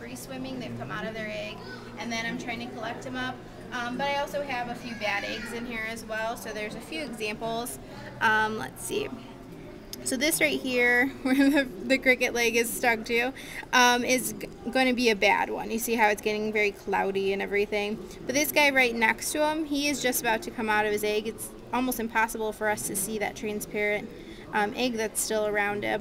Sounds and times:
Speech: 0:10.0 - 0:26.0.

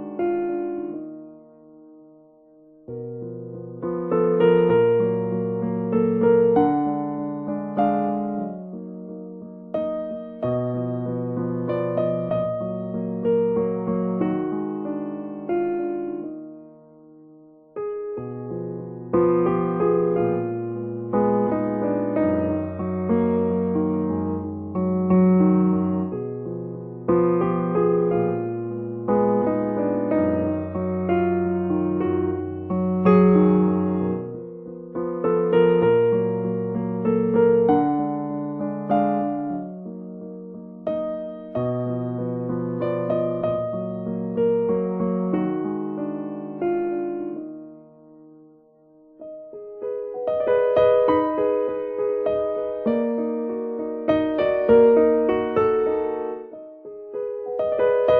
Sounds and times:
Music: 0:00.0 - 0:58.1.

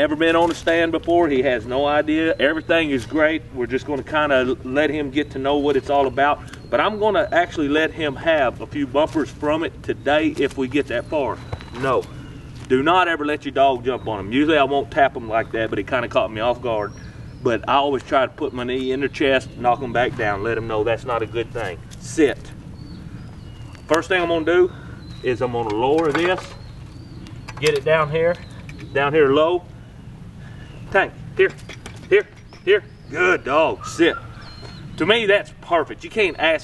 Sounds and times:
Speech: 0:00.0 - 0:12.1, 0:12.7 - 0:22.5, 0:23.9 - 0:26.6, 0:27.6 - 0:29.7, 0:30.9 - 0:34.3, 0:35.0 - 0:36.6.

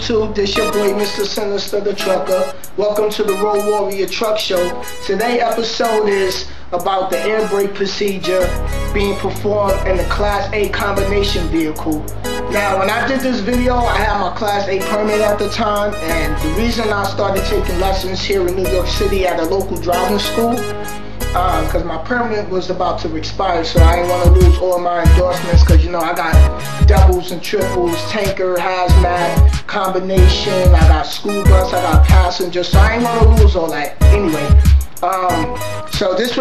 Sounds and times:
Speech: 0:00.0 - 0:20.6, 0:21.4 - 0:36.4
Music: 0:00.0 - 0:36.4.

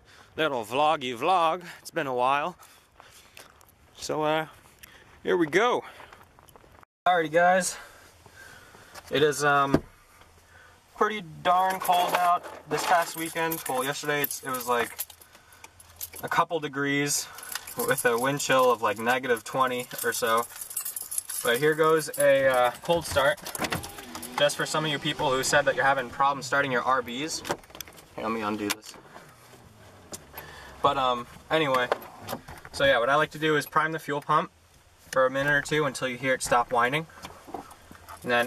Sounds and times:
Speech: 0:00.4 - 0:02.6, 0:04.0 - 0:04.6, 0:05.2 - 0:05.9, 0:07.1 - 0:07.9, 0:09.1 - 0:09.8, 0:11.0 - 0:14.9, 0:16.2 - 0:20.5, 0:21.4 - 0:23.4, 0:24.4 - 0:27.5, 0:28.2 - 0:29.0, 0:30.8 - 0:32.0, 0:32.8 - 0:34.5, 0:35.2 - 0:37.1, 0:38.2 - 0:38.4.

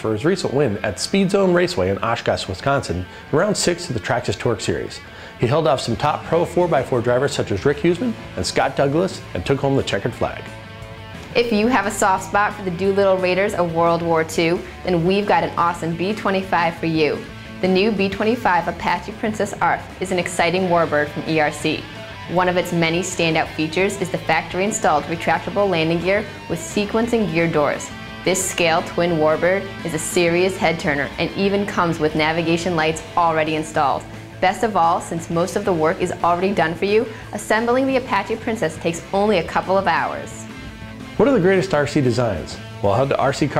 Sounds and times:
Speech: 0:00.0 - 0:10.5, 0:11.4 - 0:40.4, 0:41.2 - 0:43.5
Music: 0:00.0 - 0:43.5.

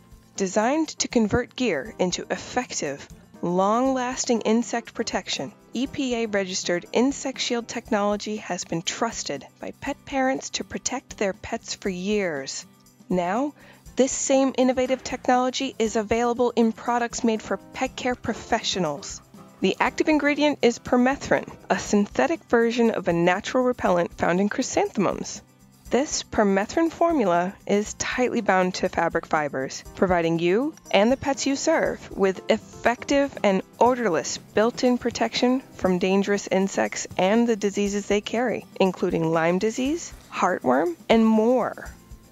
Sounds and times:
Music: 0:00.0 - 0:42.3
Speech: 0:00.4 - 0:25.4, 0:26.0 - 0:41.9.

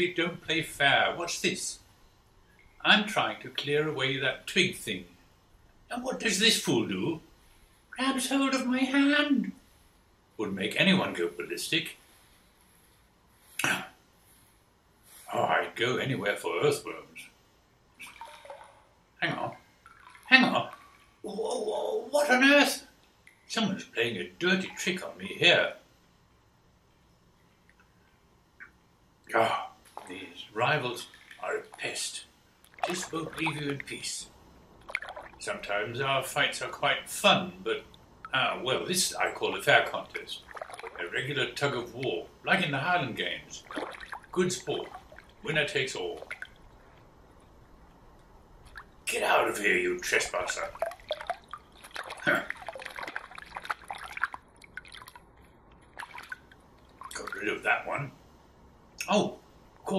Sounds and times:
Speech: 0:00.0 - 0:01.8, 0:02.8 - 0:05.1, 0:05.9 - 0:07.2, 0:08.0 - 0:09.6, 0:10.4 - 0:12.0, 0:13.6 - 0:13.9, 0:15.3 - 0:17.3, 0:19.2 - 0:19.6, 0:20.3 - 0:22.9, 0:23.5 - 0:25.8, 0:29.3 - 0:32.3, 0:32.9 - 0:34.3, 0:35.4 - 0:40.4, 0:41.0 - 0:43.7, 0:44.3 - 0:46.2, 0:49.1 - 0:50.8, 0:52.3 - 0:52.5, 0:57.2 - 0:58.2, 0:59.0 - 0:59.9.

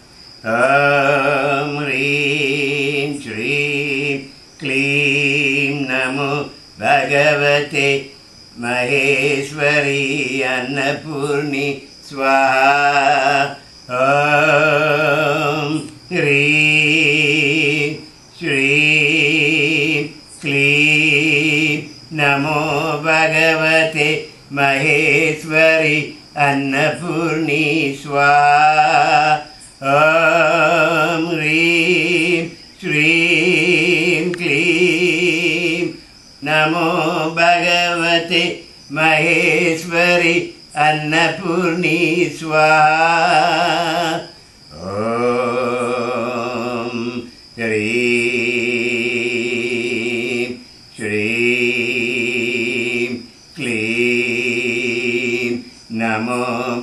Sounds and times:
Mantra: 0:00.0 - 0:56.8.

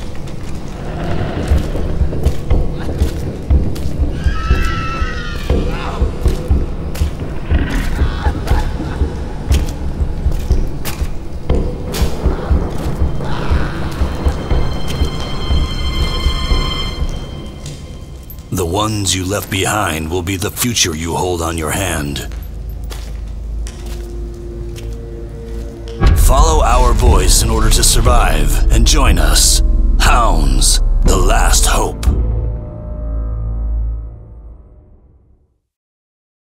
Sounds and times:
Music: 0:00.0 - 0:35.8
Speech: 0:18.5 - 0:22.3, 0:26.0 - 0:32.2.

